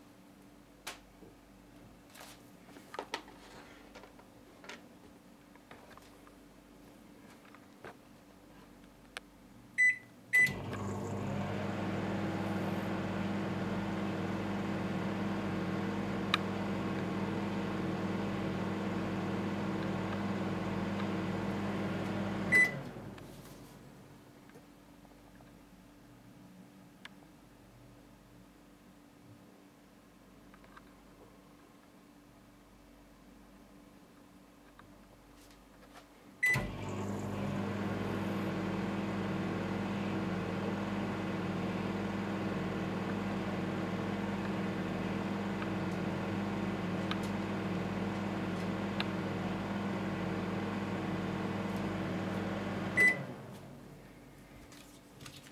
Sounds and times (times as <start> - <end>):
Microwave oven: 9.8 - 23.8, 36.4 - 54.0.